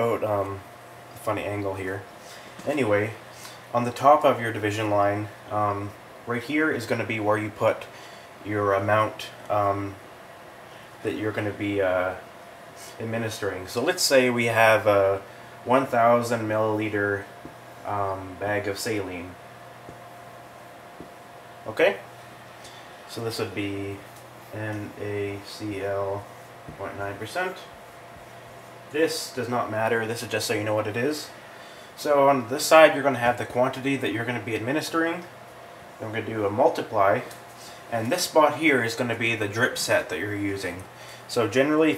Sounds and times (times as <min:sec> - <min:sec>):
Speech: 0:00.0 - 0:10.0, 0:11.0 - 0:12.3, 0:12.9 - 0:19.4, 0:21.6 - 0:22.1, 0:23.1 - 0:27.8, 0:28.9 - 0:31.4, 0:32.0 - 0:35.4, 0:36.0 - 0:41.9.